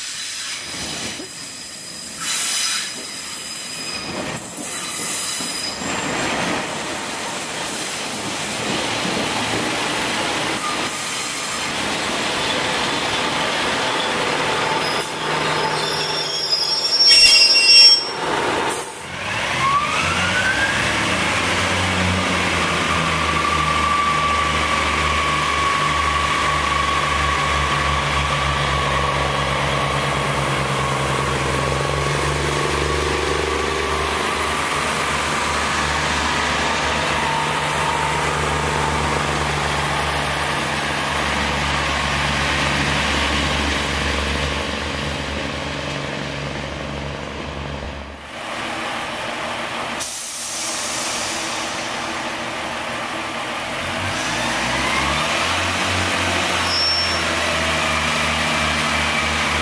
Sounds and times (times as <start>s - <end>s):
Railroad car, train wagon: 0.0s - 59.6s
Subway, metro, underground: 0.0s - 59.6s
Train: 0.0s - 59.6s.